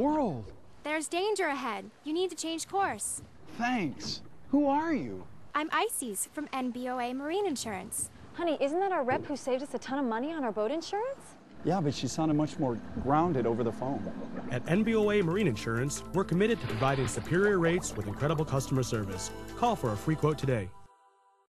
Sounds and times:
Water: 0.0s - 20.4s
Speech: 0.0s - 20.7s
Music: 14.8s - 21.5s.

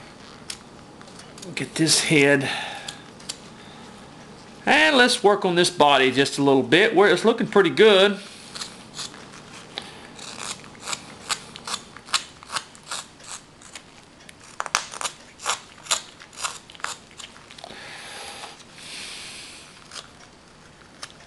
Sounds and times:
Speech: 1.4s - 2.5s, 4.7s - 8.3s.

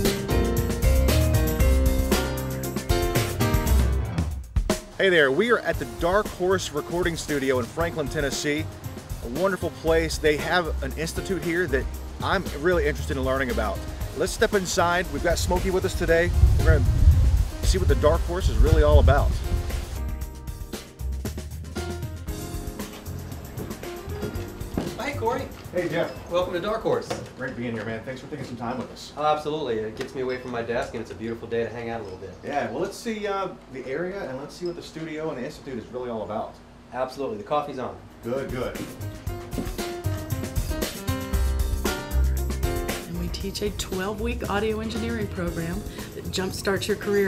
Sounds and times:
Music: 0.0s - 27.1s, 38.2s - 47.2s
Speech: 5.0s - 8.6s, 9.2s - 16.9s, 17.6s - 19.4s, 25.0s - 38.9s, 43.1s - 47.2s.

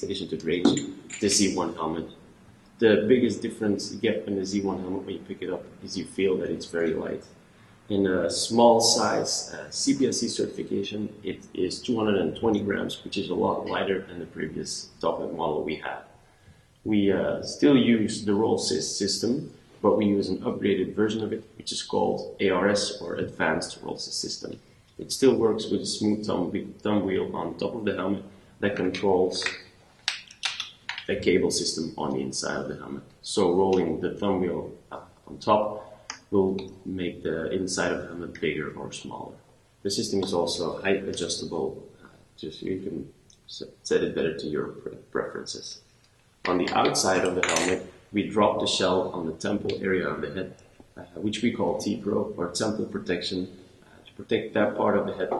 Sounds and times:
Speech: 0.0s - 2.2s, 2.8s - 7.3s, 7.9s - 16.1s, 16.9s - 29.6s, 30.5s - 45.8s, 46.4s - 55.3s.

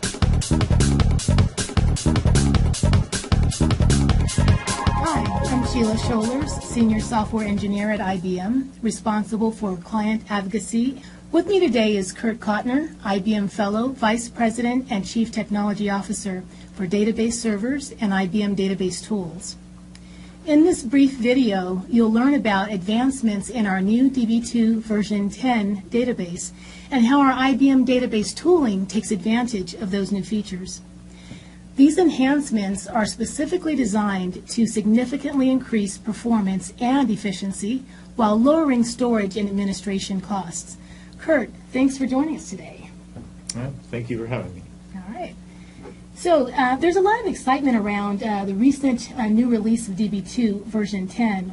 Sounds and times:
Speech: 5.0s - 19.6s, 20.5s - 30.9s, 31.8s - 42.9s, 43.5s - 45.4s, 46.2s - 51.5s.

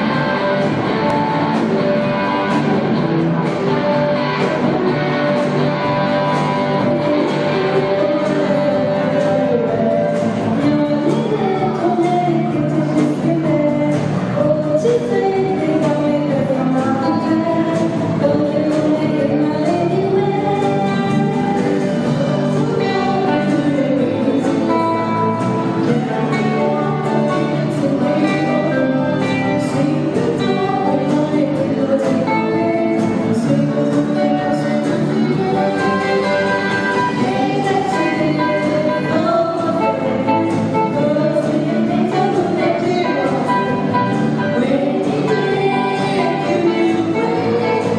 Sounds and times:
Music: 0.0s - 47.9s
Female singing: 4.4s - 47.9s.

